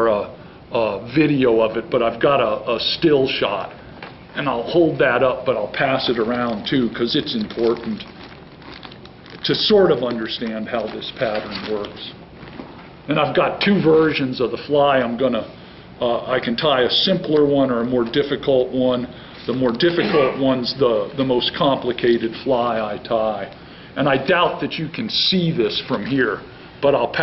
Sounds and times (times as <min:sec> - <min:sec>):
Speech: 0:00.0 - 0:03.8, 0:04.4 - 0:08.1, 0:09.4 - 0:12.2, 0:13.1 - 0:27.2.